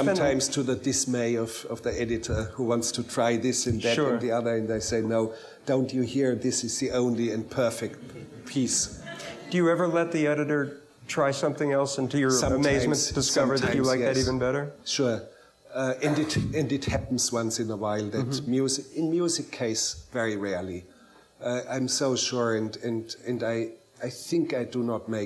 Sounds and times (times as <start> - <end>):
Male speech, man speaking: 0.0 - 25.2.